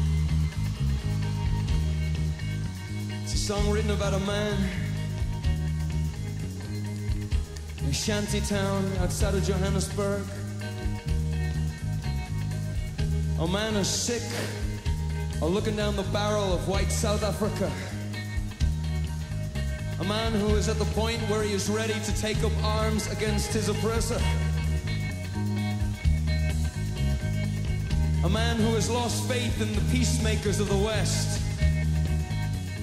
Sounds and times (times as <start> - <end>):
Music: 0.0 - 32.8
Narration, monologue: 1.9 - 25.7, 26.3 - 32.4
Male speech, man speaking: 3.3 - 4.8, 7.8 - 10.4, 13.4 - 14.7, 15.4 - 18.0, 20.0 - 24.4, 28.2 - 31.5.